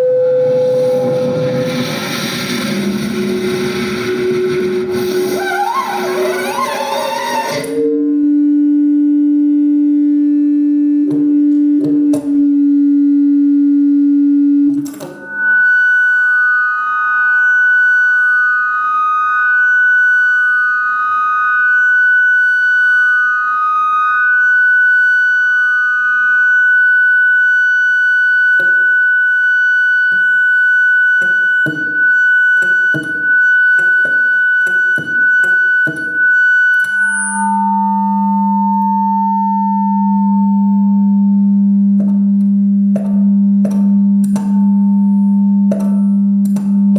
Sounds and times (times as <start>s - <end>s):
Musical instrument: 0.0s - 8.4s.